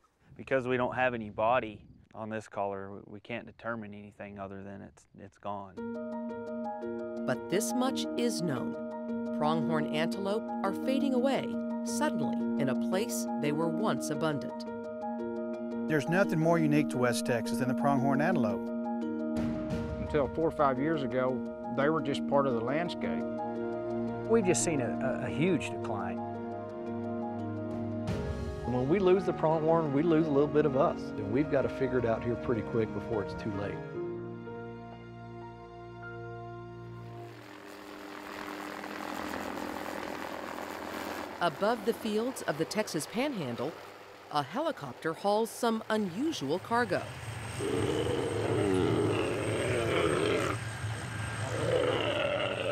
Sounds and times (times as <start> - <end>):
Speech: 0.4 - 5.8, 7.3 - 8.7, 9.4 - 14.6, 15.9 - 18.6, 20.1 - 23.2, 24.3 - 26.2, 28.7 - 33.8, 41.4 - 43.7, 44.4 - 47.1
Music: 5.8 - 40.1, 41.4 - 50.6.